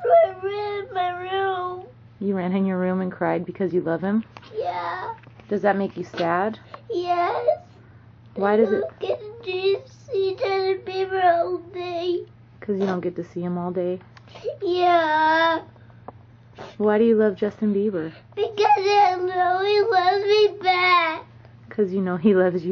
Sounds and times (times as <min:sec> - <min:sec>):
Speech: 0:21.7 - 0:22.7.